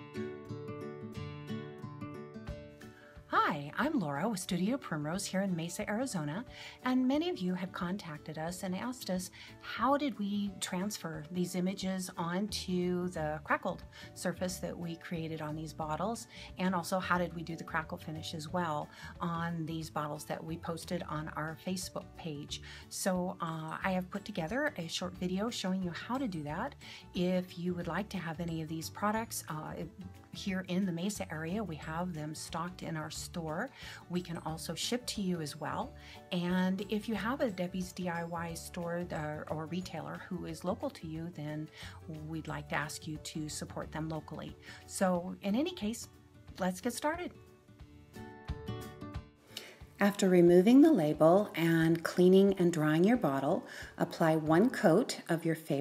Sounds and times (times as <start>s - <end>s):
Music: 0.0s - 55.8s
Speech: 3.3s - 47.4s, 50.0s - 55.8s.